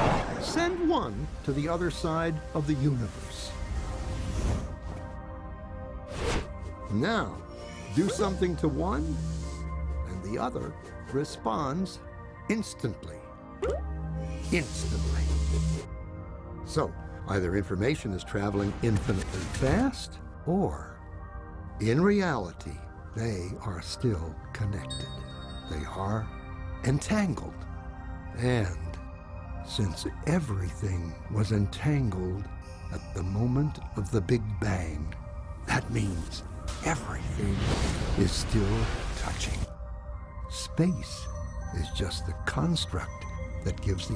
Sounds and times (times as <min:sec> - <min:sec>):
Music: 0:00.0 - 0:44.1
Speech: 0:08.0 - 0:09.2, 0:14.5 - 0:15.6, 0:16.7 - 0:21.0, 0:21.8 - 0:25.0, 0:25.7 - 0:27.6, 0:28.4 - 0:29.0, 0:29.7 - 0:39.7, 0:40.5 - 0:44.1.